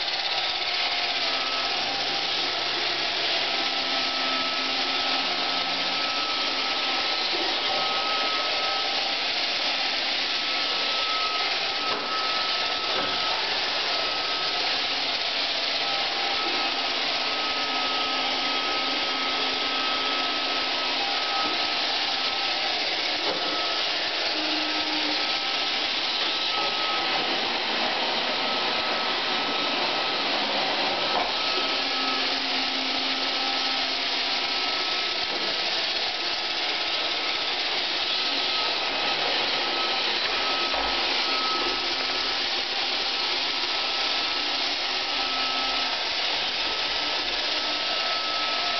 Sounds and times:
Vacuum cleaner: 0:00.0 - 0:48.7.

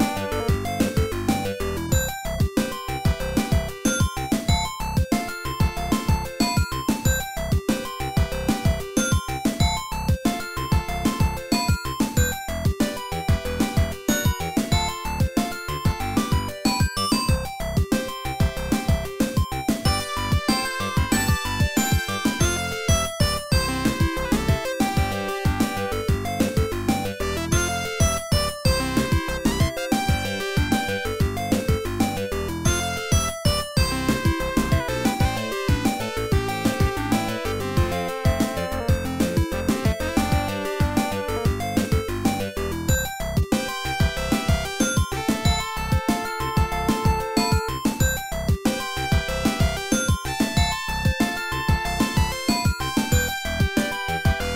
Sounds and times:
Video game music: 0:00.0 - 0:54.5.

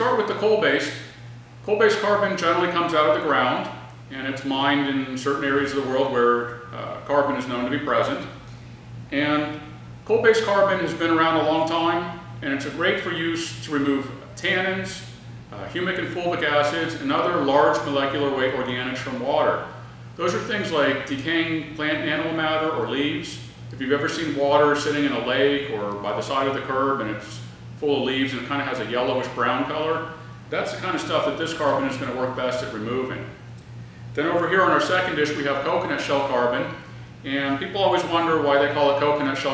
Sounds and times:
Speech: 0:00.0 - 0:01.1, 0:01.7 - 0:08.4, 0:09.1 - 0:33.4, 0:34.2 - 0:39.5.

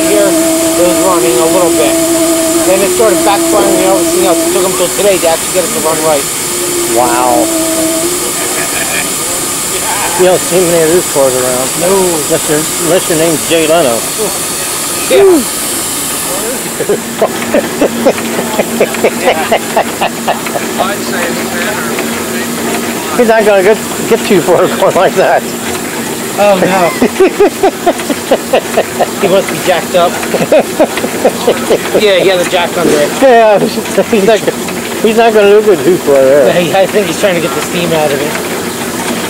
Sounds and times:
Speech: 0:06.9 - 0:07.5, 0:31.4 - 0:38.4.

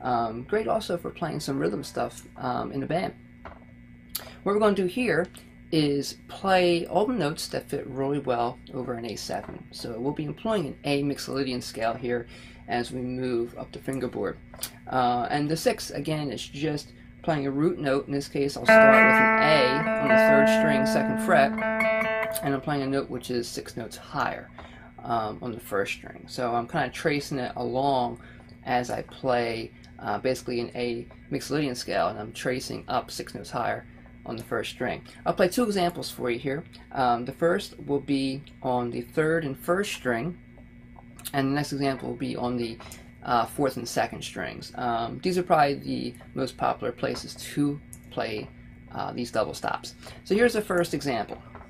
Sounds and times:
Speech: 0:00.0 - 0:03.2, 0:04.2 - 0:21.6, 0:22.2 - 0:40.4, 0:41.2 - 0:51.5
Guitar: 0:18.6 - 0:23.2.

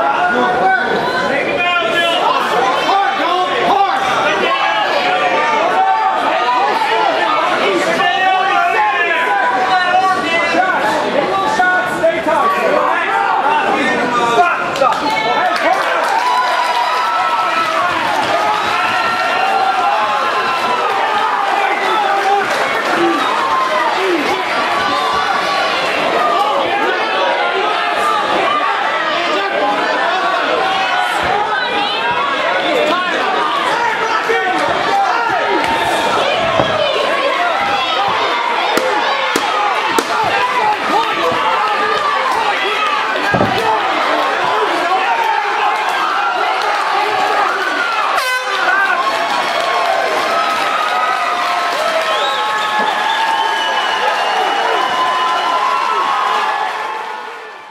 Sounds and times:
Speech: 0:00.0 - 0:16.2, 0:20.7 - 0:49.3
Inside, large room or hall: 0:00.0 - 0:57.7
Inside, public space: 0:00.0 - 0:57.7.

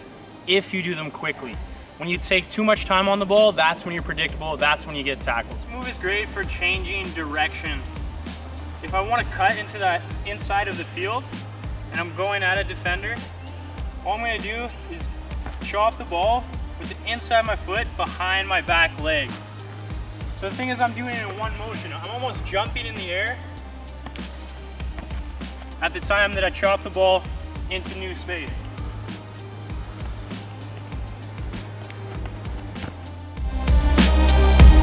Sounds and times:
Music: 0:00.0 - 0:34.8
Speech: 0:00.5 - 0:07.8, 0:08.8 - 0:11.2, 0:11.9 - 0:13.3, 0:14.0 - 0:19.3, 0:20.4 - 0:23.4, 0:25.8 - 0:28.6.

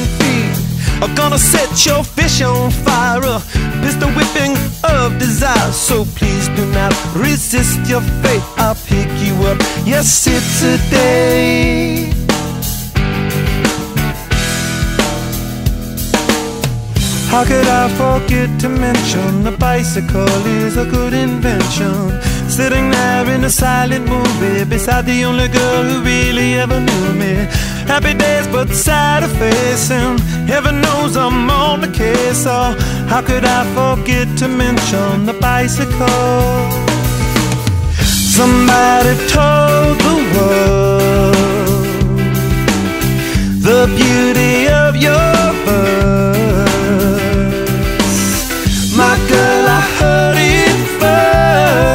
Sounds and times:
Music: 0:00.0 - 0:51.9.

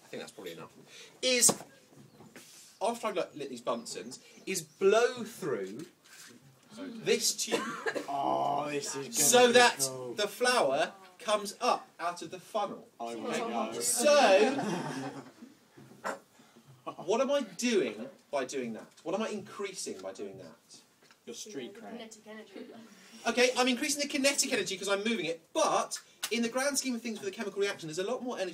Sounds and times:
Speech: 0:06.8 - 0:14.6.

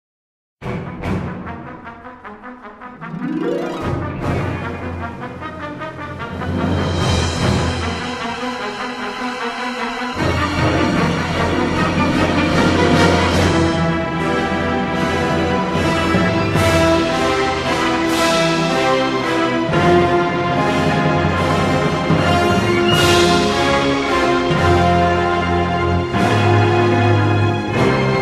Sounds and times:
Brass instrument: 0:00.6 - 0:28.2.

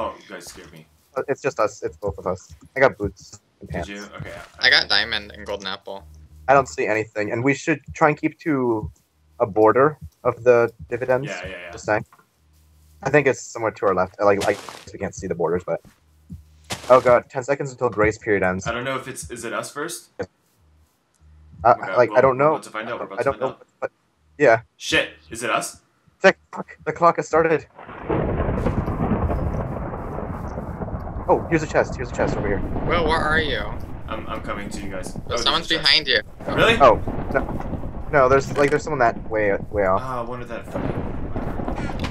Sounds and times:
Speech: 0:00.0 - 0:12.1, 0:13.0 - 0:15.8, 0:16.9 - 0:20.3, 0:21.6 - 0:27.7, 0:31.3 - 0:37.5, 0:38.1 - 0:41.0.

